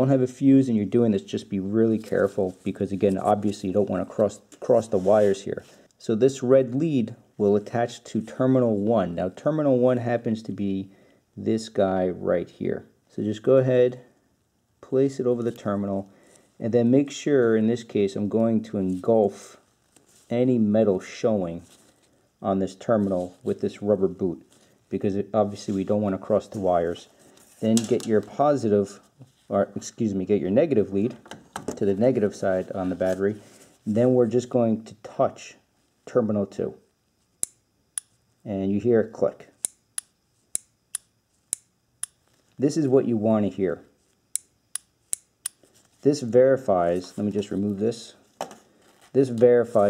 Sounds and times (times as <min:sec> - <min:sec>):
Speech: 0:00.0 - 0:14.1, 0:14.8 - 0:19.7, 0:20.3 - 0:21.7, 0:22.4 - 0:36.9, 0:38.4 - 0:39.6, 0:42.6 - 0:43.9, 0:46.0 - 0:48.2, 0:49.1 - 0:49.8.